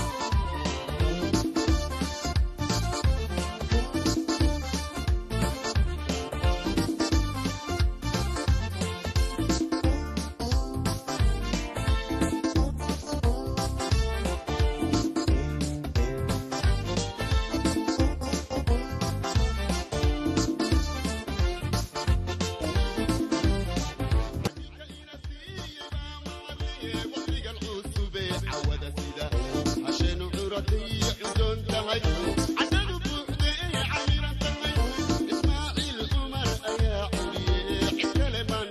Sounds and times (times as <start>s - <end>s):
Music: 0.0s - 38.7s.